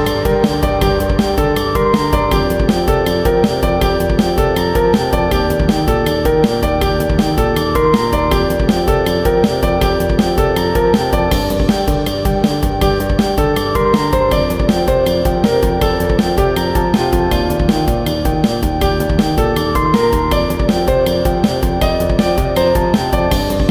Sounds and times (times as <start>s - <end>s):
Music: 0.0s - 23.7s.